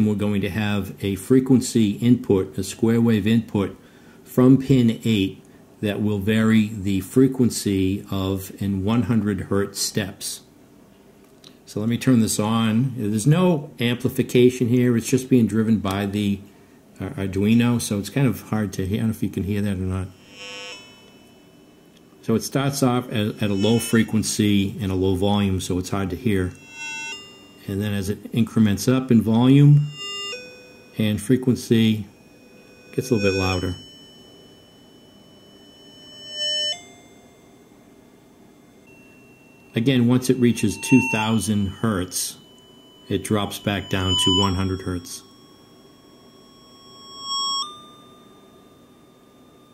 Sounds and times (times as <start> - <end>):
Speech: 0.0 - 10.5, 11.7 - 20.2, 22.2 - 26.6, 27.6 - 29.9, 31.0 - 32.1, 33.0 - 33.8, 39.8 - 42.4, 43.1 - 45.3
Music: 32.6 - 39.8, 40.4 - 41.8, 42.4 - 44.7.